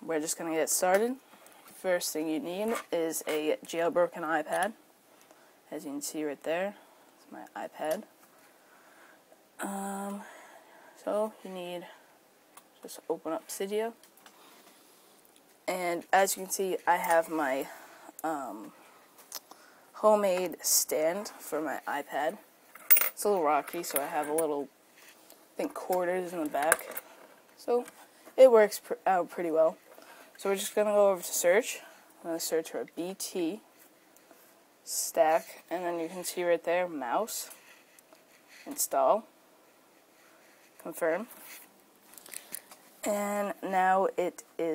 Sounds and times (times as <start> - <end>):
Speech: 0.0 - 1.2, 1.8 - 4.8, 5.7 - 8.1, 11.0 - 12.0, 12.8 - 14.0, 15.7 - 18.8, 20.0 - 22.4, 23.2 - 24.7, 25.6 - 26.9, 27.6 - 29.8, 30.4 - 33.6, 34.9 - 37.5, 38.7 - 39.3, 40.8 - 41.3, 43.1 - 44.7.